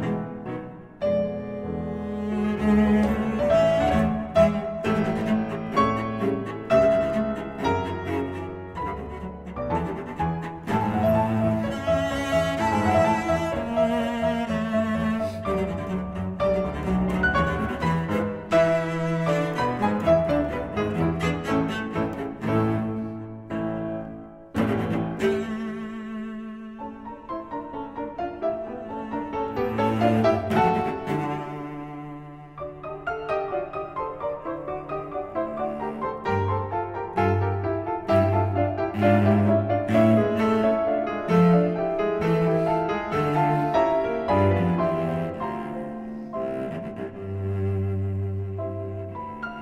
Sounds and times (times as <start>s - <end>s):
Double bass: 0.0s - 26.8s, 28.8s - 32.6s, 34.9s - 49.6s
Cello: 0.0s - 49.6s
Classical music: 0.0s - 49.6s
Piano: 0.0s - 49.6s.